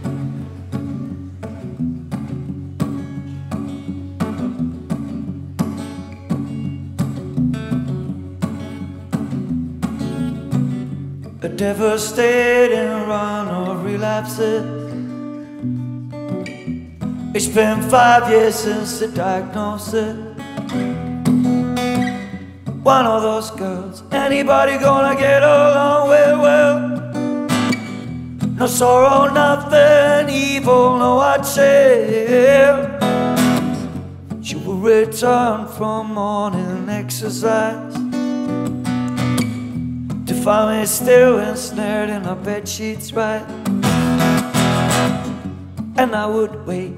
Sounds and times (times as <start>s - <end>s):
Music: 0.0s - 46.9s.